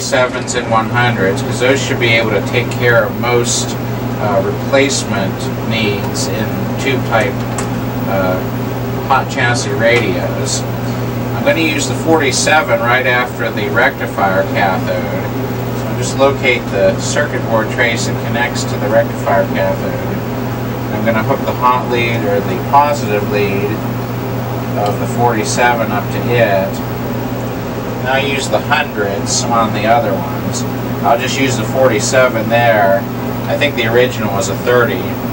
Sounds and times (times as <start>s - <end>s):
Speech: 0.0s - 7.5s, 8.1s - 8.5s, 9.1s - 20.2s, 20.9s - 23.8s, 24.8s - 26.9s, 28.0s - 35.3s.